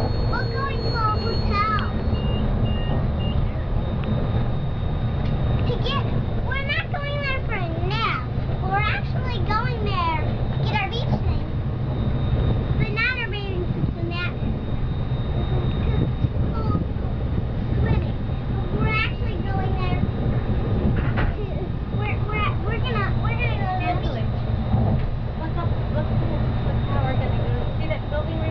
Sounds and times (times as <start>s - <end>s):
Vehicle: 0.0s - 28.5s.